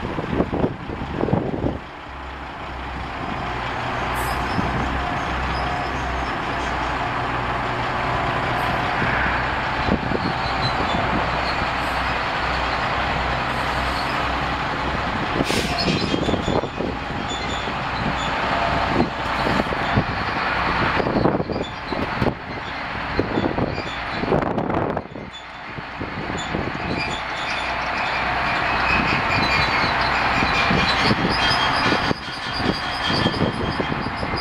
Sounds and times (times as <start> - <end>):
Outside, urban or manmade: 0.0 - 34.4
Vehicle: 0.0 - 34.4.